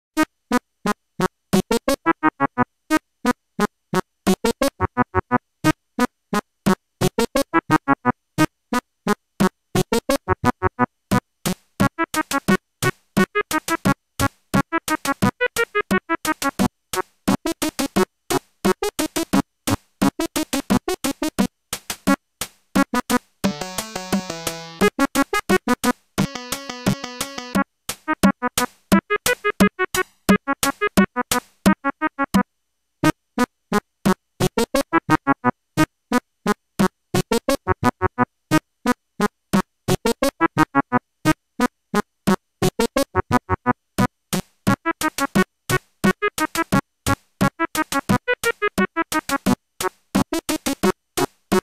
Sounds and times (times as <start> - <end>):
Music: 0.2 - 33.2, 34.4 - 35.9, 36.8 - 38.6, 39.5 - 41.4, 42.6 - 51.6.